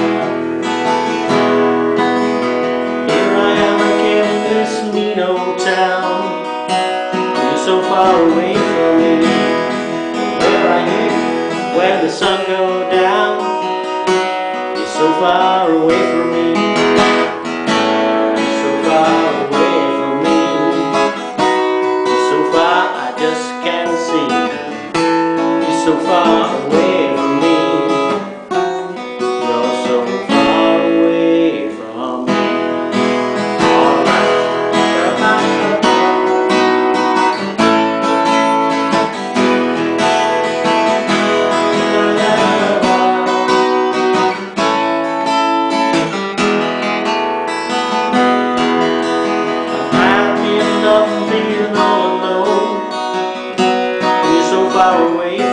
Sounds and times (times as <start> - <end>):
Acoustic guitar: 0.0 - 55.5
Strum: 0.0 - 55.5.